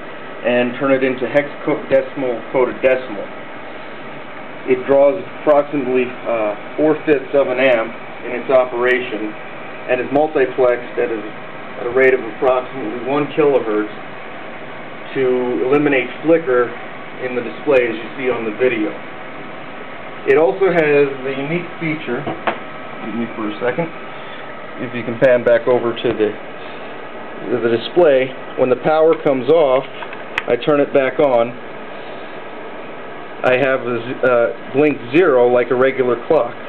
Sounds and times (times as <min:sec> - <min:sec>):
Speech: 0:00.4 - 0:03.3, 0:04.6 - 0:14.0, 0:15.1 - 0:19.0, 0:20.2 - 0:22.4, 0:23.0 - 0:24.0, 0:24.8 - 0:26.4, 0:27.4 - 0:31.6, 0:33.4 - 0:36.6.